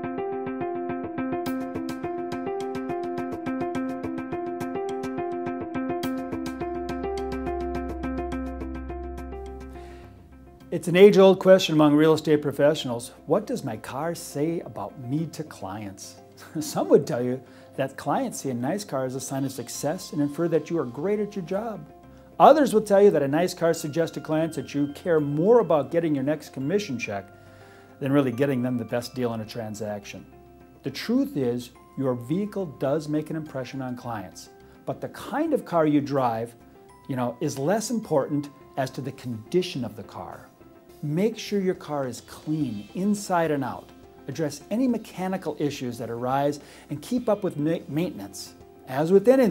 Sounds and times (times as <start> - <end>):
Music: 0.0 - 49.5
Speech: 10.7 - 21.8, 22.4 - 27.3, 28.0 - 30.2, 30.9 - 36.5, 37.1 - 49.5.